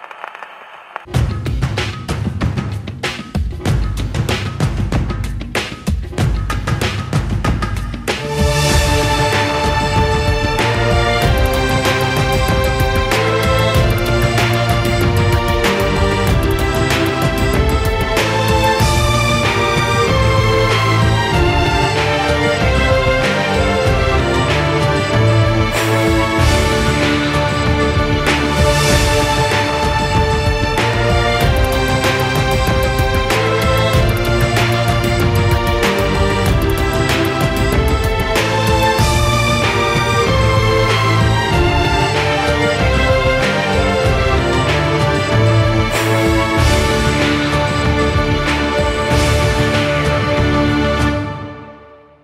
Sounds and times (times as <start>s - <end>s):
Music: 0.0s - 52.2s.